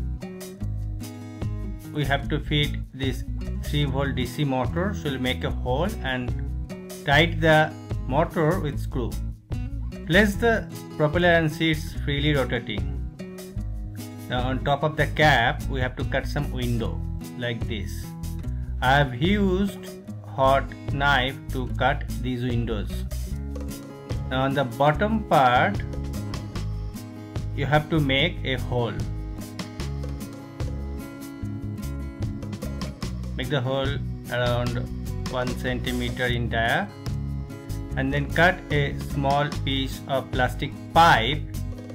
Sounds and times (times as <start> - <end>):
Music: 0.0 - 41.9
Speech: 1.9 - 6.4, 7.1 - 9.2, 10.1 - 13.0, 14.3 - 18.1, 18.8 - 23.1, 24.3 - 25.8, 27.6 - 29.1, 33.4 - 36.9, 38.0 - 41.5.